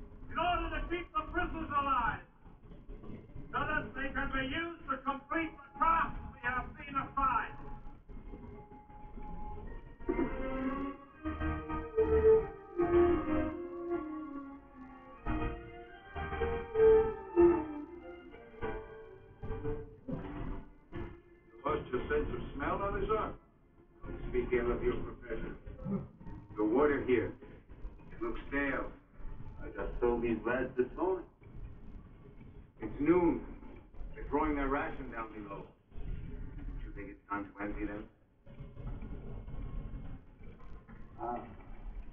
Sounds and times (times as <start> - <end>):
Music: 0.0 - 42.1
Conversation: 0.2 - 14.3, 15.4 - 42.1
Male speech, man speaking: 0.3 - 2.3, 3.5 - 7.6, 21.6 - 23.4, 24.0 - 25.6, 26.6 - 27.4, 28.1 - 29.0, 29.6 - 31.3, 32.8 - 33.6, 34.2 - 35.8, 36.8 - 38.1, 41.2 - 41.6.